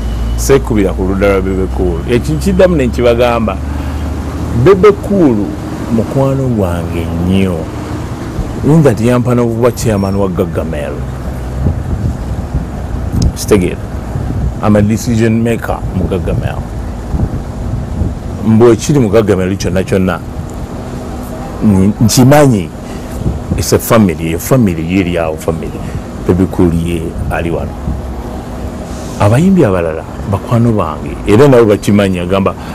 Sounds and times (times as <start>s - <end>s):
Wind noise (microphone): 11.5s - 15.0s, 15.8s - 18.5s, 23.0s - 23.8s, 27.1s - 28.1s.